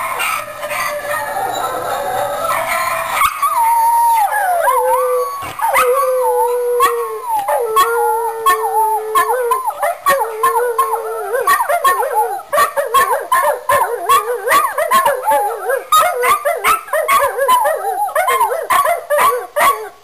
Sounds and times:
Howl: 0.0 - 20.0.

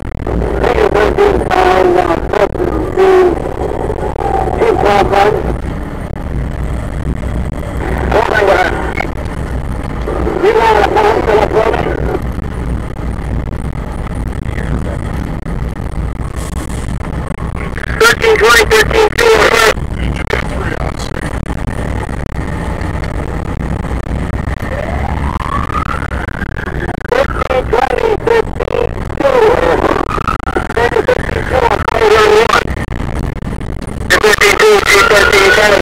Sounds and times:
Vehicle: 0.0 - 35.8
Speech: 0.6 - 3.4, 4.6 - 5.5, 8.1 - 9.0, 10.1 - 12.2, 17.6 - 21.2, 27.1 - 29.8, 30.7 - 32.6, 34.1 - 35.8.

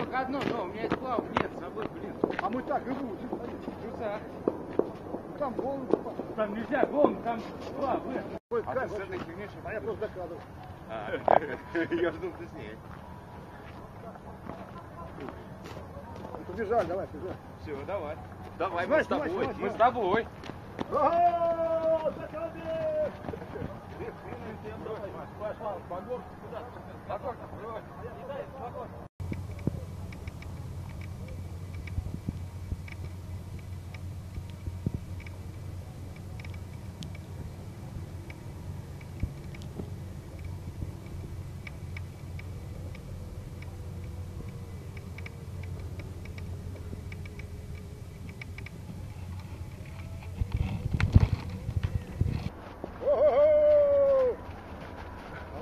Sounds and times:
Speech: 0.0 - 4.4, 5.4 - 12.8, 13.8 - 20.3, 20.9 - 29.0
Run: 0.0 - 29.8, 48.4 - 55.6.

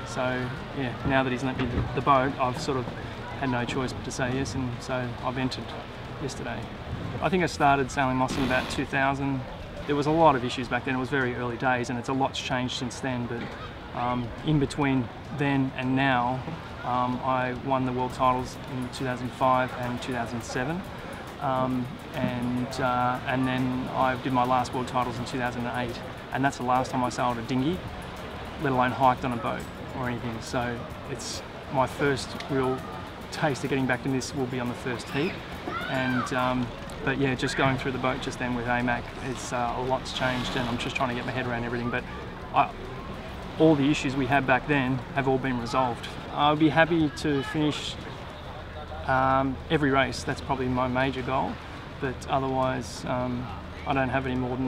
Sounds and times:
Speech: 0.0 - 27.8, 28.6 - 42.7, 43.6 - 48.0, 49.1 - 54.6.

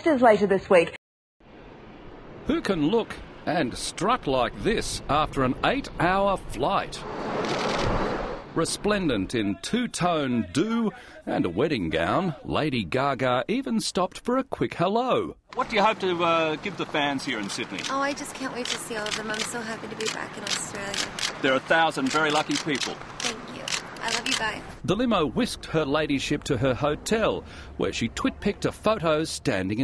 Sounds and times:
Speech: 2.5 - 7.0, 8.6 - 29.8.

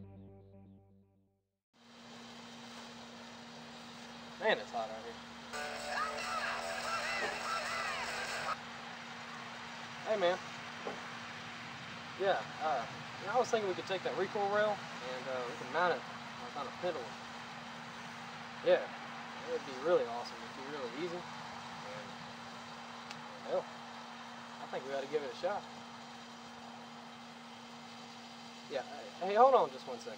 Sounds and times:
Speech: 4.4 - 5.2, 10.0 - 10.4, 12.2 - 17.1, 18.6 - 21.2, 23.4 - 23.7, 24.6 - 25.6, 28.7 - 30.1.

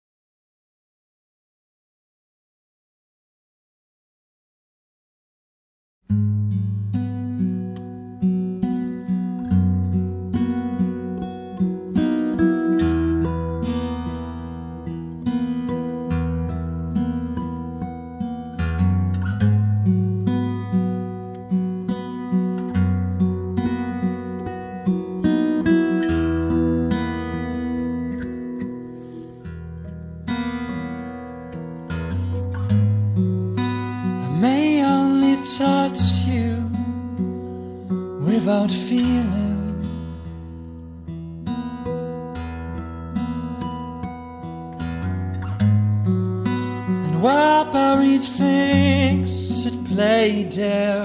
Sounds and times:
Music: 6.0 - 51.0.

